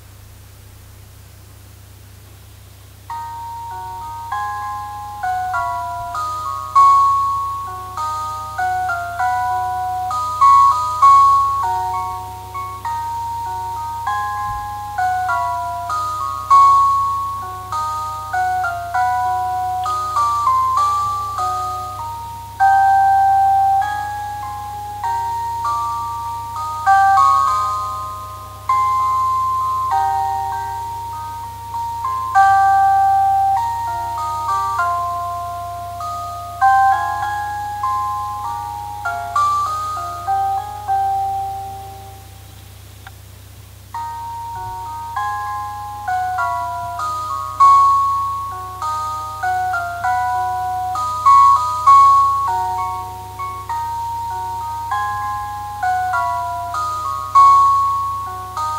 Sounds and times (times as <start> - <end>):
Glockenspiel: 3.0 - 58.7
Marimba, xylophone: 3.1 - 42.5, 44.0 - 58.7.